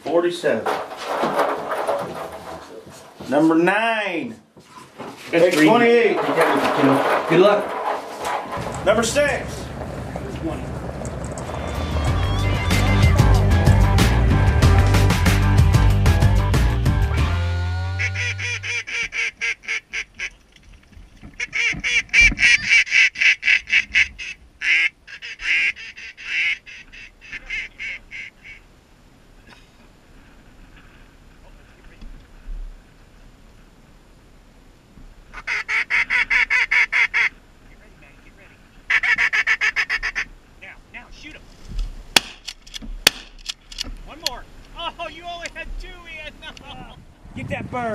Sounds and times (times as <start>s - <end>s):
Honk: 17.9s - 20.4s, 21.4s - 28.6s, 35.3s - 37.4s, 38.9s - 40.3s.